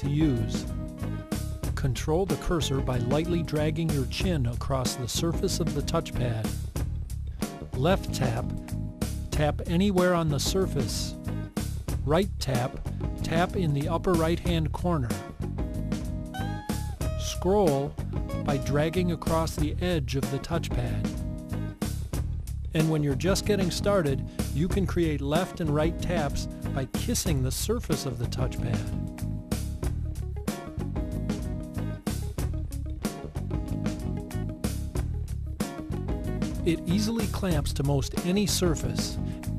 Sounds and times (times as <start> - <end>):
Speech: 0.0 - 0.7, 1.8 - 6.6, 7.7 - 8.5, 9.3 - 11.2, 12.0 - 15.2, 17.2 - 21.2, 22.7 - 29.0, 36.6 - 39.2
Music: 0.0 - 39.5.